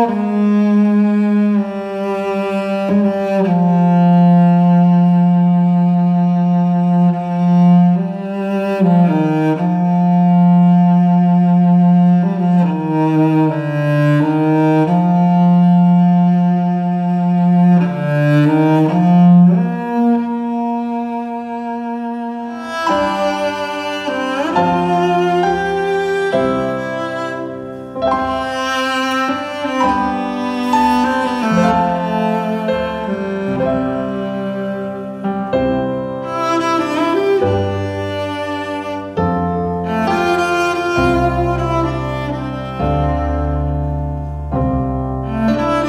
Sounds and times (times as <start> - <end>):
Cello: 0.0 - 45.8
Double bass: 0.0 - 45.8.